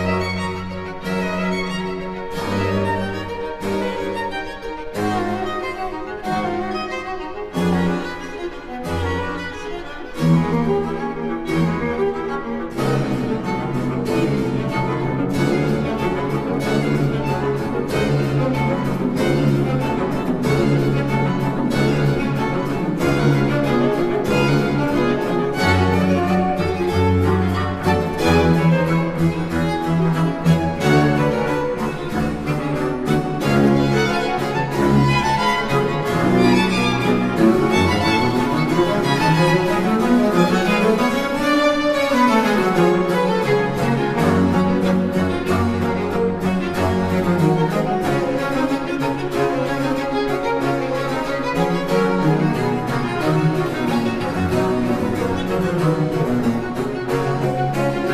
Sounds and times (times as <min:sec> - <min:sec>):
Orchestra: 0:00.0 - 0:58.1
String section: 0:00.0 - 0:58.1
Violin, fiddle: 0:00.0 - 0:58.1.